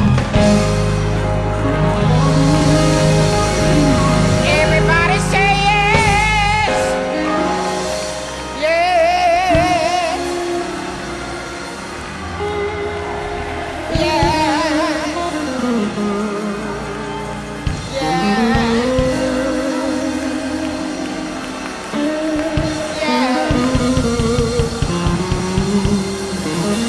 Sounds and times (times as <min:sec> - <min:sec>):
Female singing: 0:03.5 - 0:07.6, 0:08.6 - 0:10.6, 0:13.9 - 0:16.7, 0:17.9 - 0:21.0, 0:22.0 - 0:24.7
Choir: 0:09.5 - 0:24.4.